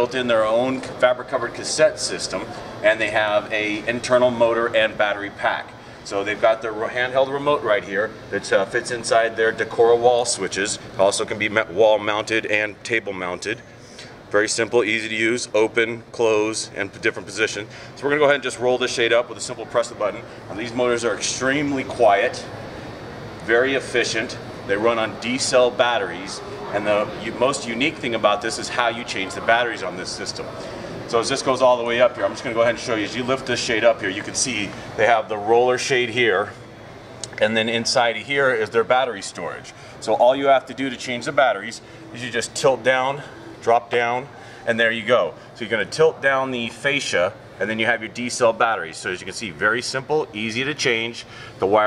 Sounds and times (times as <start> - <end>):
Speech: 0.0 - 13.6, 14.3 - 22.6, 23.4 - 36.6, 37.2 - 51.8.